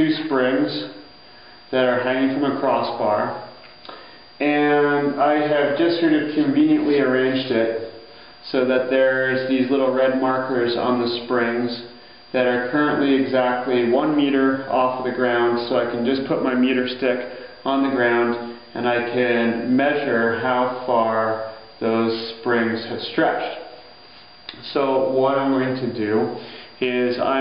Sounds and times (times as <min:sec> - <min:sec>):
Speech: 0:00.0 - 0:01.0, 0:01.7 - 0:03.5, 0:04.4 - 0:23.8, 0:24.5 - 0:27.4.